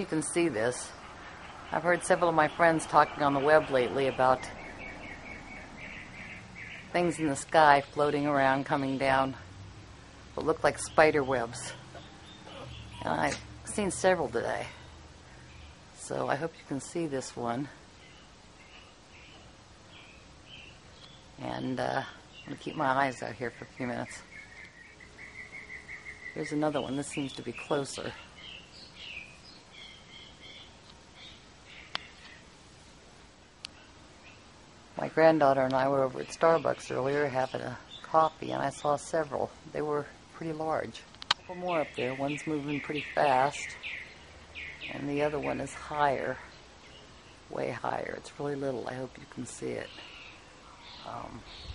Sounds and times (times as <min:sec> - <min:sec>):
Speech: 0:01.8 - 0:04.5, 0:07.0 - 0:09.4, 0:10.4 - 0:11.8, 0:12.6 - 0:14.7, 0:16.0 - 0:17.8, 0:21.4 - 0:24.2, 0:26.4 - 0:28.2, 0:35.0 - 0:43.8, 0:44.9 - 0:46.5, 0:47.5 - 0:50.0, 0:51.0 - 0:51.5.